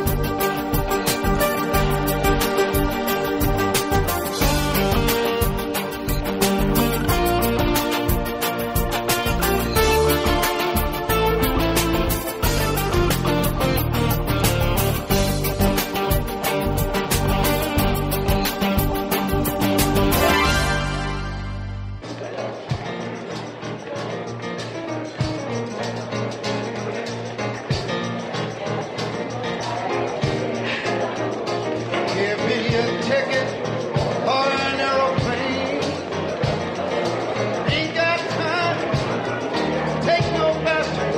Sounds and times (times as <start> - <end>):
Music: 0.0 - 41.1
Speech: 27.0 - 41.1.